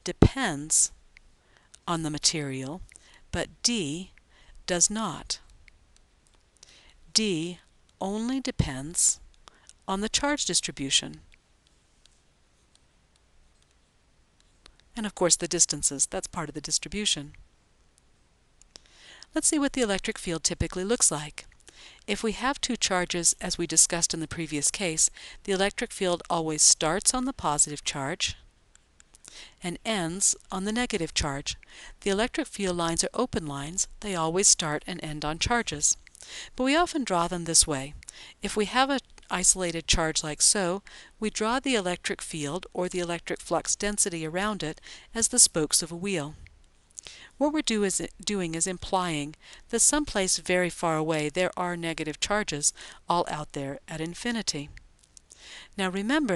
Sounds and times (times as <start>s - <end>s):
Speech: 0.0s - 1.0s, 1.9s - 2.8s, 3.4s - 4.1s, 4.7s - 5.4s, 7.2s - 9.2s, 9.9s - 11.2s, 15.0s - 17.3s, 19.4s - 21.5s, 22.1s - 28.4s, 29.6s - 36.0s, 36.6s - 46.4s, 47.4s - 54.8s, 55.8s - 56.3s.